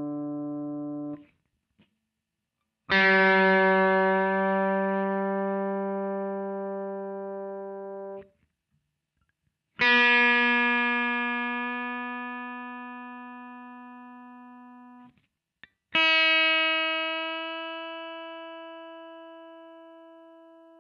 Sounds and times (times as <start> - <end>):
Electronic tuner: 0.0 - 20.8
Music: 0.0 - 20.8.